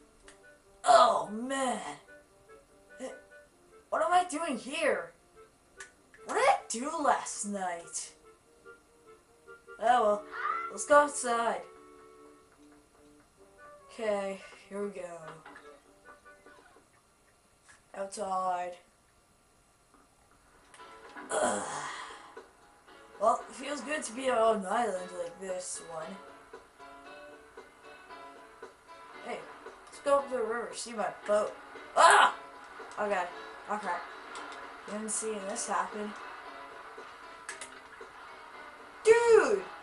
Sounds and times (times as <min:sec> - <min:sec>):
Music: 0:00.0 - 0:17.1, 0:20.4 - 0:39.8
Speech: 0:00.9 - 0:02.0, 0:04.0 - 0:05.1, 0:06.3 - 0:08.2, 0:09.8 - 0:11.6, 0:13.9 - 0:15.4, 0:17.9 - 0:18.9, 0:23.2 - 0:26.2, 0:29.2 - 0:32.4, 0:33.0 - 0:34.0, 0:34.9 - 0:36.1, 0:39.1 - 0:39.7.